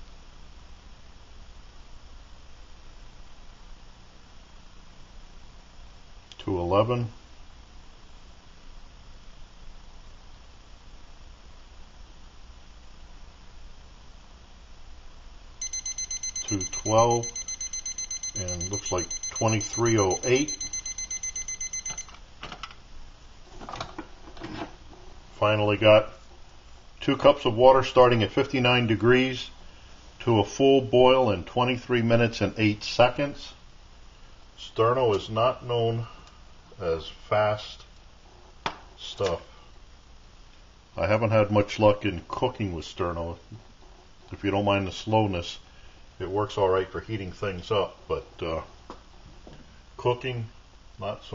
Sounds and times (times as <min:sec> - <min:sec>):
Speech: 0:06.4 - 0:07.2, 0:16.5 - 0:17.3, 0:18.4 - 0:20.5, 0:25.4 - 0:26.2, 0:27.0 - 0:29.6, 0:30.2 - 0:33.6, 0:34.6 - 0:36.2, 0:36.8 - 0:37.9, 0:39.0 - 0:39.6, 0:41.0 - 0:43.6, 0:44.3 - 0:45.6, 0:46.2 - 0:48.7, 0:50.0 - 0:51.3.